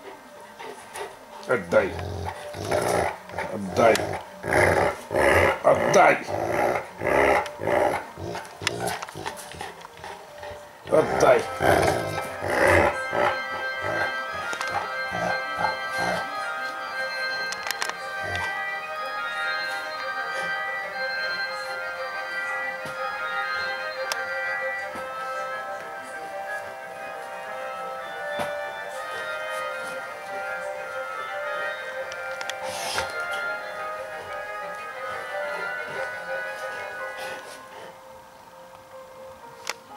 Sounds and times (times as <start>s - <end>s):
Music: 0.0s - 39.9s
Speech: 5.7s - 6.4s, 10.9s - 11.5s.